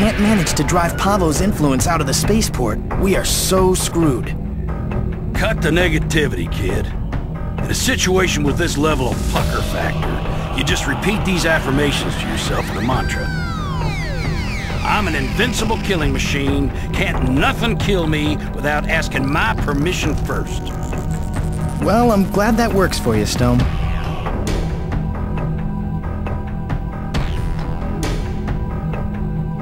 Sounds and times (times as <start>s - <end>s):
Speech: 0.0s - 4.4s, 5.4s - 7.0s, 7.6s - 13.3s, 14.9s - 20.6s, 21.8s - 23.7s
Music: 0.0s - 29.6s.